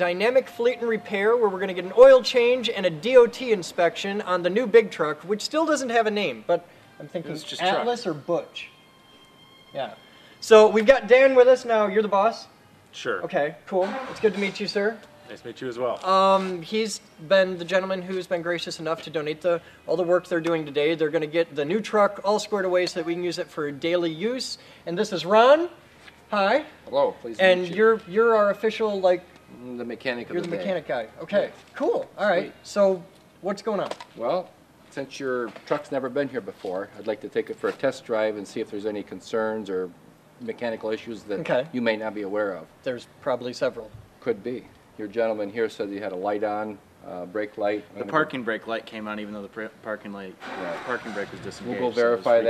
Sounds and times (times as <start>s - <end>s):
Speech: 9.8s - 52.5s.